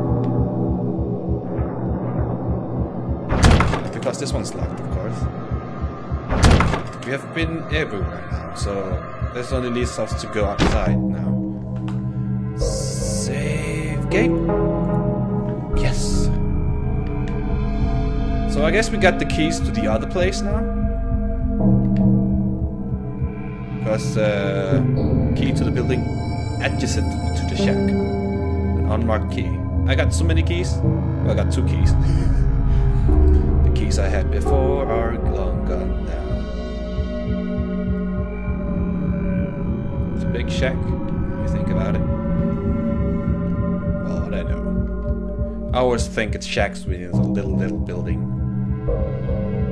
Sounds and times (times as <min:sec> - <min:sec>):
Music: 0:00.0 - 0:49.7
Speech: 0:03.7 - 0:05.3, 0:06.9 - 0:11.4, 0:12.6 - 0:14.5, 0:15.8 - 0:16.4, 0:18.5 - 0:20.7, 0:23.8 - 0:28.1, 0:28.8 - 0:32.5, 0:33.6 - 0:36.5, 0:40.2 - 0:42.1, 0:44.0 - 0:44.7, 0:45.8 - 0:48.3.